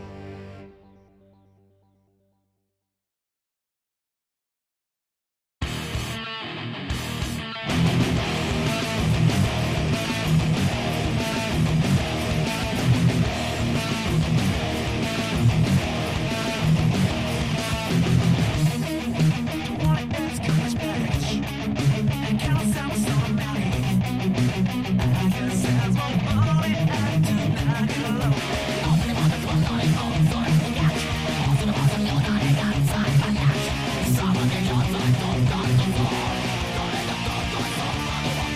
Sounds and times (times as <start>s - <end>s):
Bass guitar: 0.0s - 2.0s, 5.6s - 38.5s.